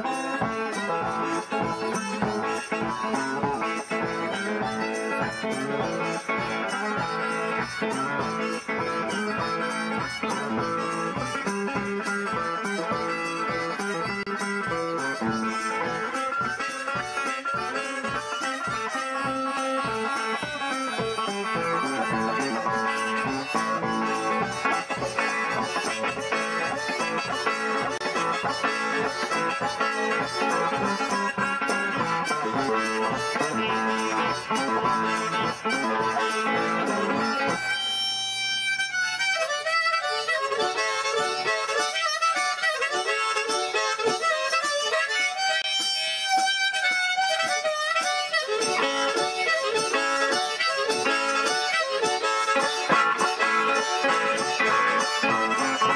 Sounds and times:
Blues: 0.0 - 55.9
Guitar: 0.0 - 55.9
Harmonica: 0.0 - 55.9.

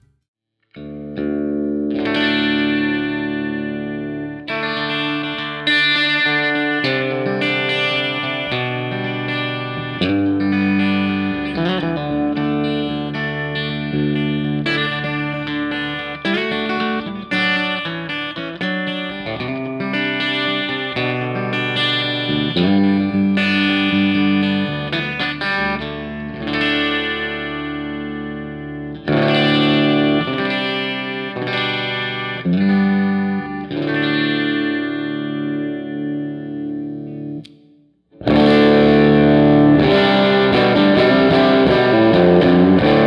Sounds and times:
Music: 0.0 - 43.0.

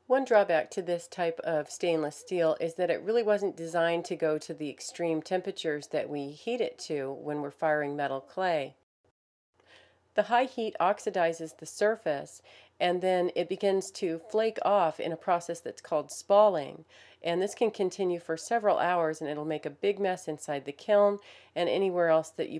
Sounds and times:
Speech: 0.1 - 8.8, 10.2 - 22.5.

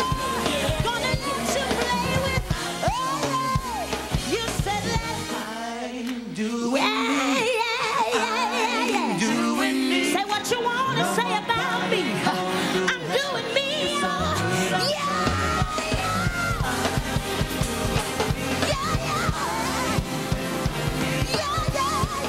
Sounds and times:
Music: 0.0 - 22.2.

